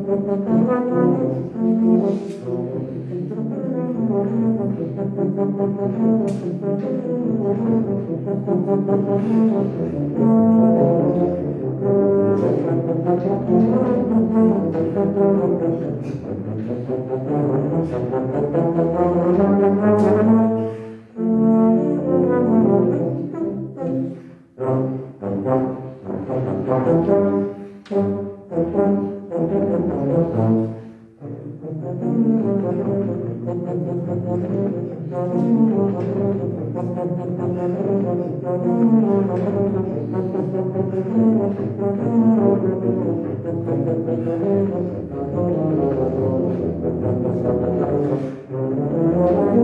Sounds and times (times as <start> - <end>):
Brass instrument: 0.0 - 49.6
Inside, large room or hall: 0.0 - 49.6.